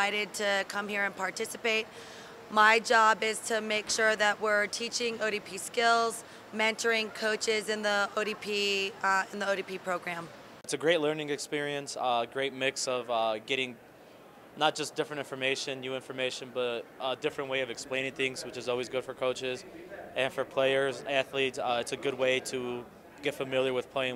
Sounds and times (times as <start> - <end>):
Speech: 2.5 - 13.8, 14.6 - 24.1.